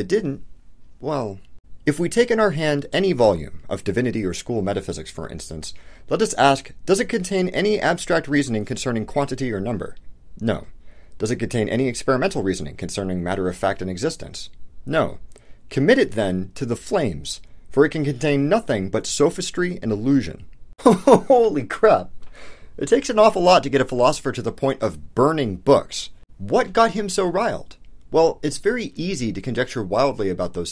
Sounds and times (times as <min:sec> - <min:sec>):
Speech: 0:00.0 - 0:00.4, 0:01.0 - 0:22.1, 0:22.8 - 0:30.7.